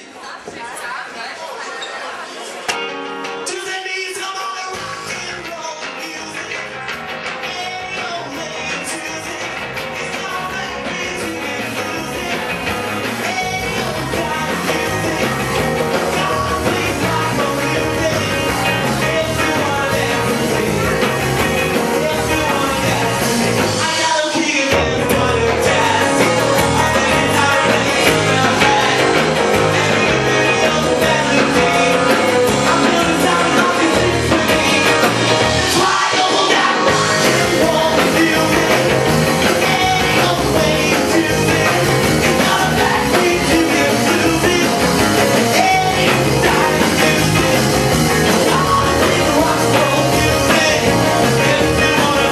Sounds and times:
Rock and roll: 2.5 - 52.3
Heavy metal: 2.7 - 52.3.

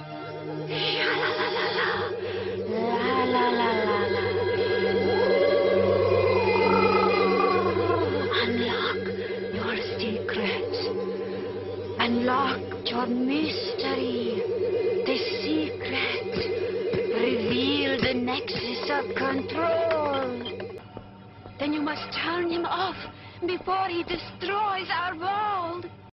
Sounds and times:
Speech: 17.1 - 20.4, 21.6 - 25.9.

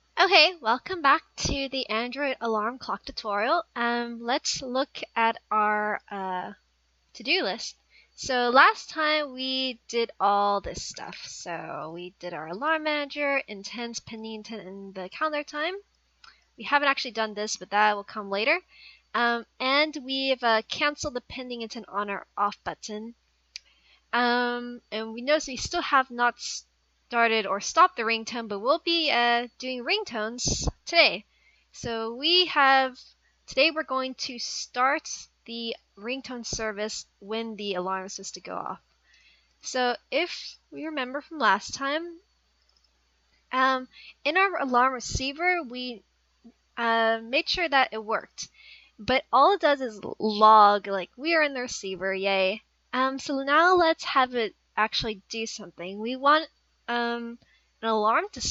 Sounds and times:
Speech: 0.2 - 6.6, 7.2 - 15.8, 16.6 - 18.6, 19.2 - 23.2, 24.2 - 26.6, 27.2 - 31.2, 31.8 - 38.8, 39.7 - 42.2, 43.6 - 46.0, 46.8 - 58.5.

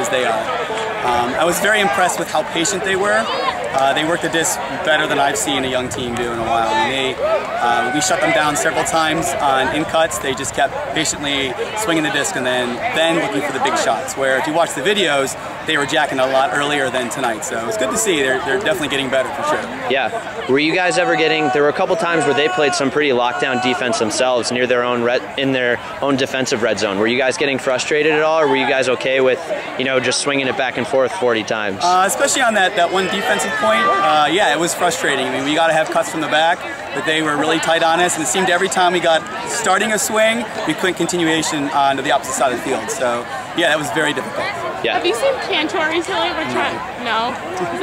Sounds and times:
Speech: 0.0 - 47.8.

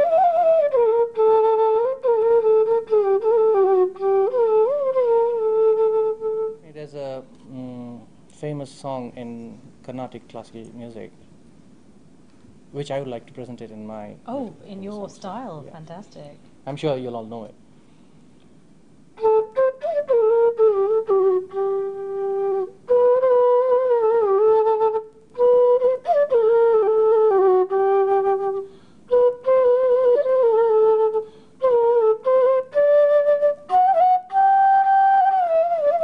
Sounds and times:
Flute: 0.0 - 6.7, 19.2 - 36.0.

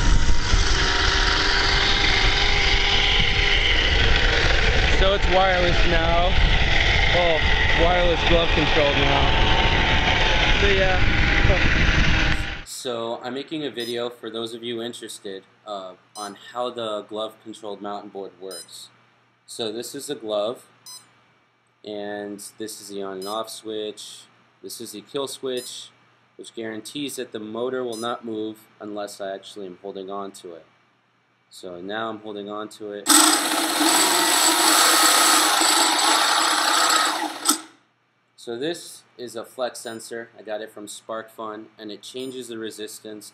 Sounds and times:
Speech: 4.9 - 6.4, 7.1 - 9.4, 10.3 - 11.7, 12.7 - 20.7, 21.9 - 30.7, 31.5 - 33.1, 38.4 - 43.3.

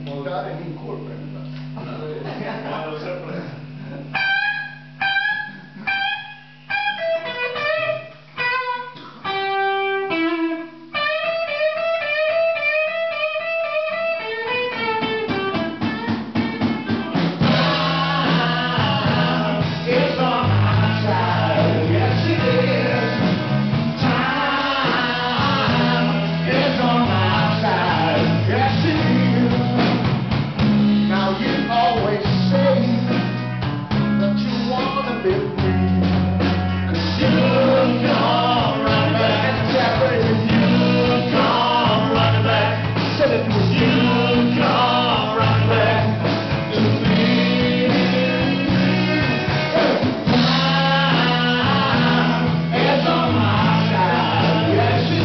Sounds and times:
Music: 2.8 - 55.2.

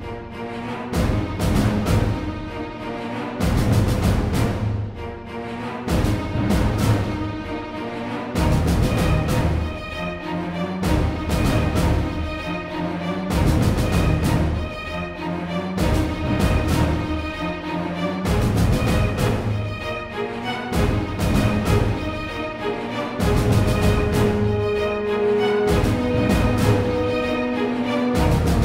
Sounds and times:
Music: 0.0 - 28.6.

